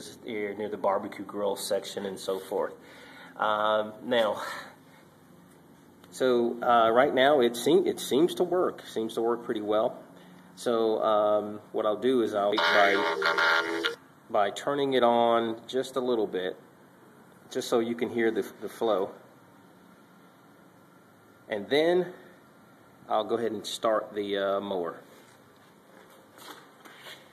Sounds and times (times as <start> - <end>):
Speech: 0.0 - 2.8, 3.4 - 4.8, 6.1 - 10.0, 10.6 - 16.6, 17.5 - 19.2, 21.5 - 22.3, 23.1 - 25.1.